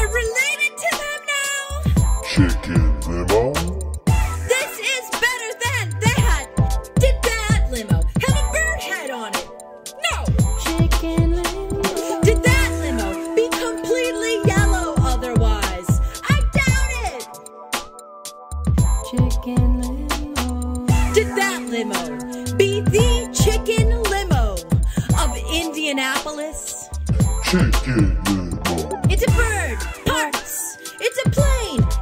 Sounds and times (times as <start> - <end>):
Speech: 0.0 - 3.9, 4.5 - 9.4, 10.0 - 11.0, 12.1 - 17.3, 19.1 - 19.7, 20.9 - 31.9
Music: 0.0 - 32.0.